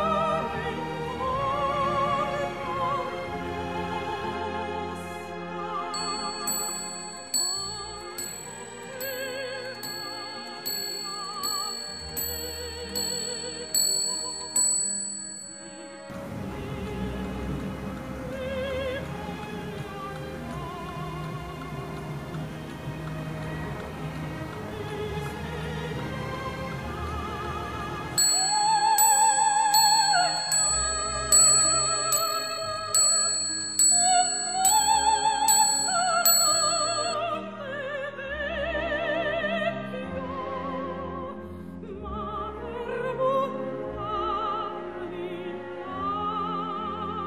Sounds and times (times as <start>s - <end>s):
Music: 0.0s - 47.2s.